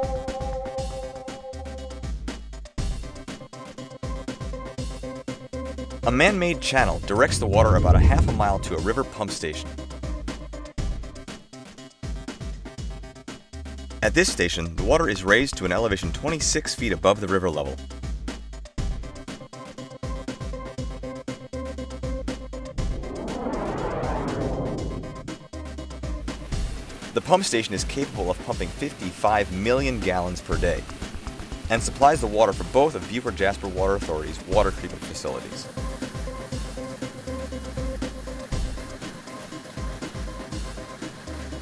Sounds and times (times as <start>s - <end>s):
Music: 0.0s - 41.6s
Speech: 6.0s - 9.7s, 14.0s - 17.8s, 27.2s - 30.8s, 31.7s - 35.7s.